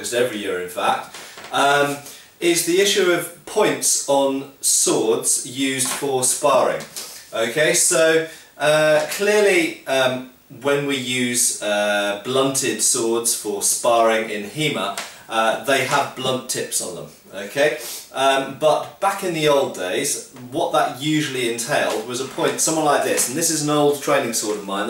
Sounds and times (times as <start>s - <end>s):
Speech: 0.0s - 24.8s.